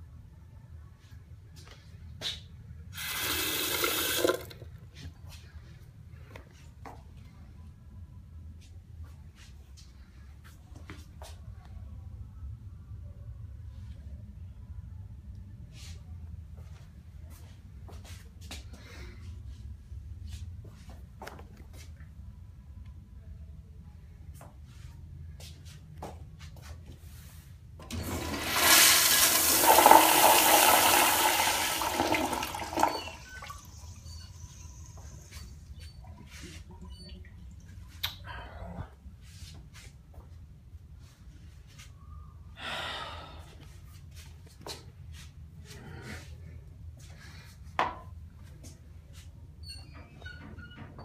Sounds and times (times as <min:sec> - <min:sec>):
Toilet flush: 0:03.0 - 0:04.6, 0:27.9 - 0:34.6.